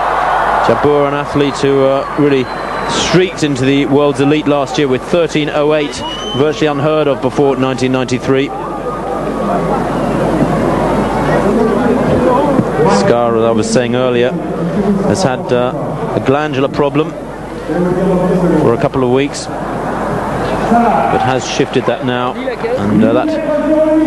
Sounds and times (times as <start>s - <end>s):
Speech: 0.6s - 8.6s, 11.4s - 19.5s, 20.7s - 24.0s.